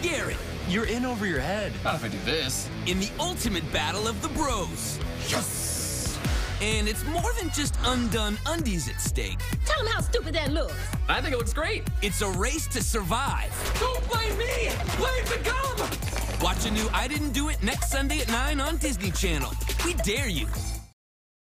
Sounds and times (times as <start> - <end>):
Music: 0.0 - 21.0.